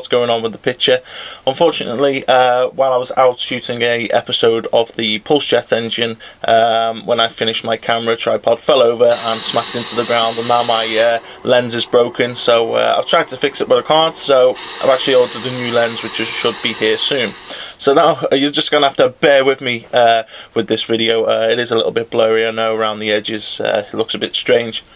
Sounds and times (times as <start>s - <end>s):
Speech: 0.0s - 24.9s.